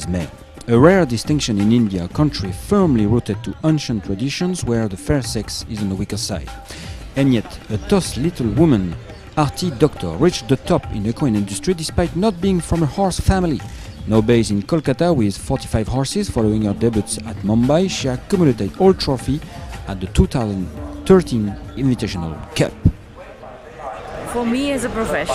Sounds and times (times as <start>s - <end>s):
Speech: 0.0s - 6.5s, 7.2s - 22.9s
Music: 0.0s - 23.1s.